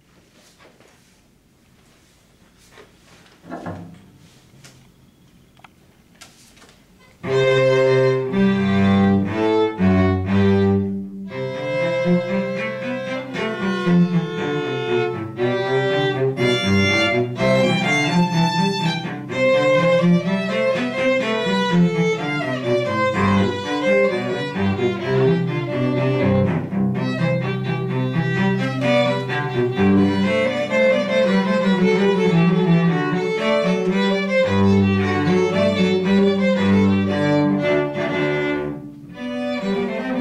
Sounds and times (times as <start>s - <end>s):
Violin, fiddle: 7.2s - 40.2s.